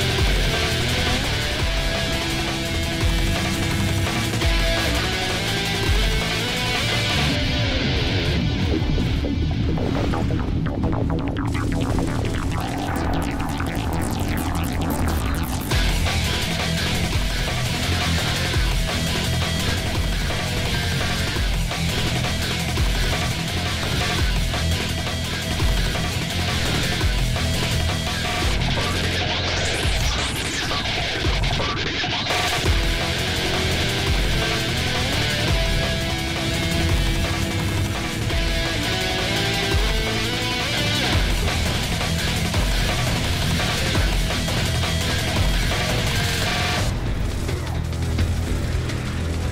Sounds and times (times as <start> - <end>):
Music: 0.0 - 49.5.